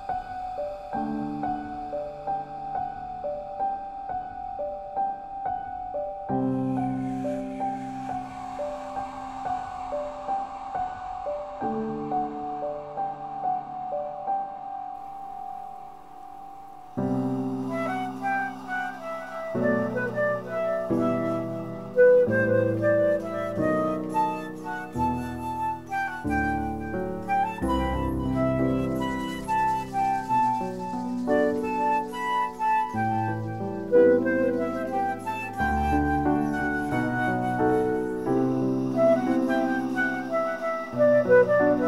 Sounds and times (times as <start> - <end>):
Flute: 0.0 - 41.8.